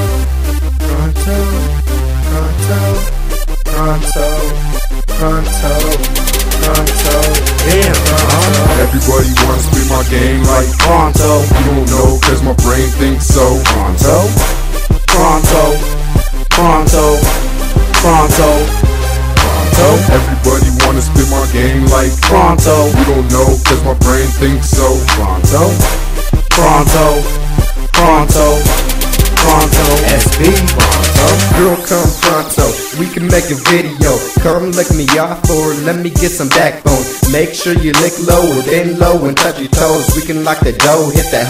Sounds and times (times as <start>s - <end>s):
Exciting music: 0.0s - 41.4s.